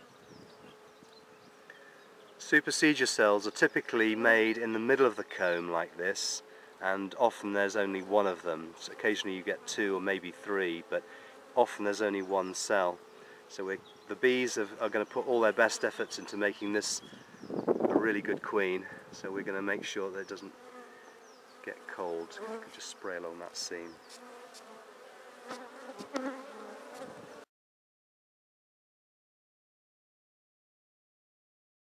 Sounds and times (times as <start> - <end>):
Bee, wasp, etc.: 0.0 - 27.5
Fly, housefly: 0.0 - 27.5.